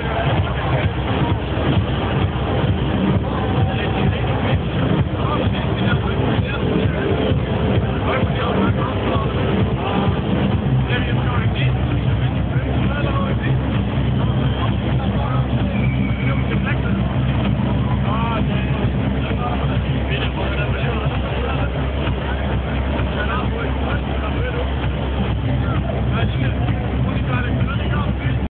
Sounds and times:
Speech: 0.0s - 28.5s
Techno: 0.0s - 28.5s.

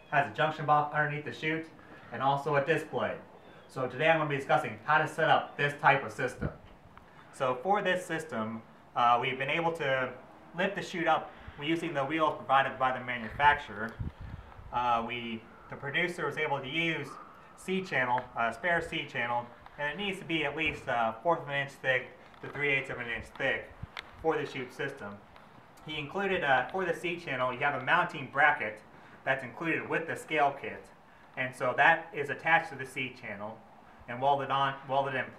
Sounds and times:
Speech: 0.0s - 6.6s, 7.4s - 14.0s, 14.7s - 25.2s, 25.8s - 35.3s.

